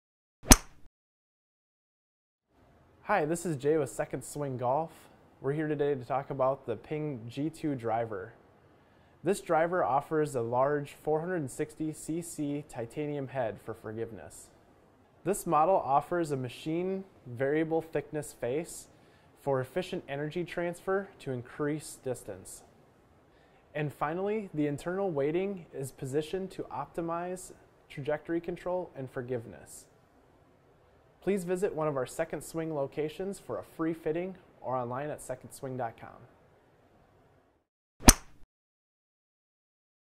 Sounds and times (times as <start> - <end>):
Speech: 3.0 - 8.4, 9.2 - 14.6, 15.2 - 22.7, 23.7 - 29.9, 31.2 - 36.4.